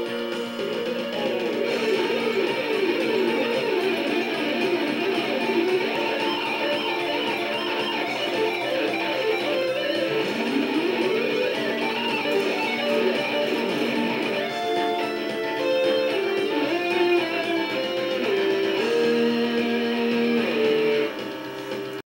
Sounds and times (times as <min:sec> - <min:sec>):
Guitar: 0:00.0 - 0:22.0.